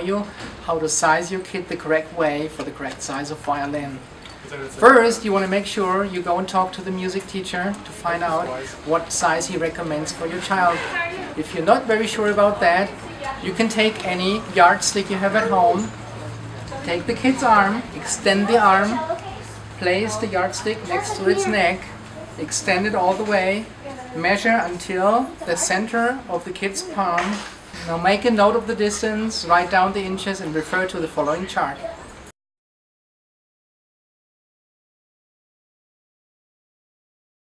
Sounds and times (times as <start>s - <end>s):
Speech: 0.0s - 16.0s, 16.7s - 32.0s.